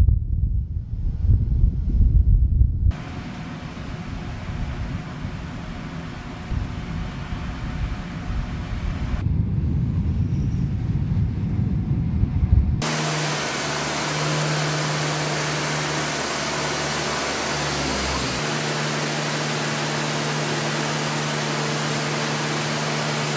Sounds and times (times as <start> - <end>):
Fixed-wing aircraft, airplane: 2.9 - 23.3.